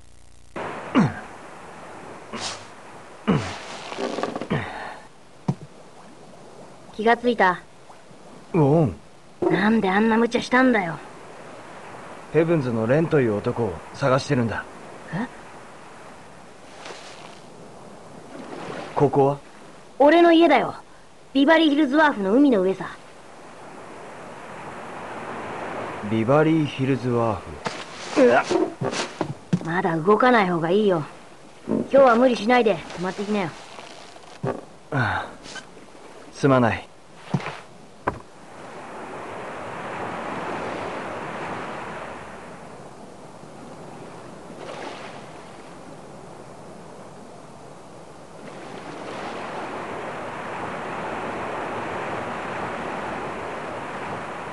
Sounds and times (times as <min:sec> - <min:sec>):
Sailboat, sailing ship: 0:00.6 - 0:54.5.